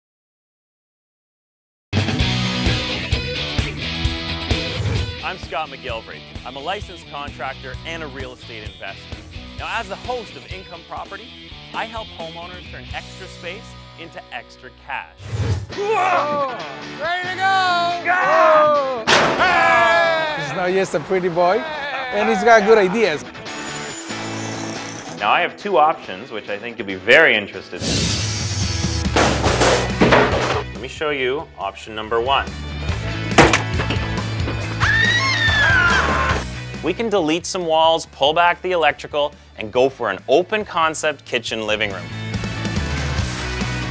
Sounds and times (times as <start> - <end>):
Music: 1.9 - 43.9
Speech: 5.2 - 9.0, 9.6 - 11.2, 11.8 - 15.1, 25.2 - 27.8, 30.8 - 32.5, 36.8 - 42.0.